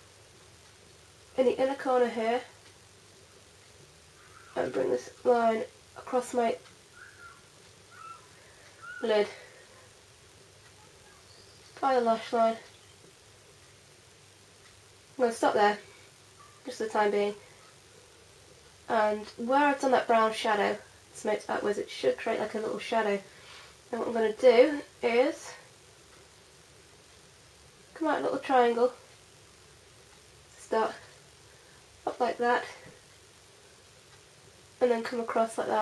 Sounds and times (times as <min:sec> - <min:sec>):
Inside, small room: 0:00.0 - 0:35.8
Speech: 0:01.4 - 0:02.5, 0:04.6 - 0:06.6, 0:09.0 - 0:09.4, 0:10.8 - 0:12.7, 0:15.2 - 0:15.8, 0:16.6 - 0:17.4, 0:18.9 - 0:23.3, 0:23.9 - 0:25.6, 0:28.0 - 0:29.0, 0:30.6 - 0:31.1, 0:32.0 - 0:32.9, 0:34.8 - 0:35.8.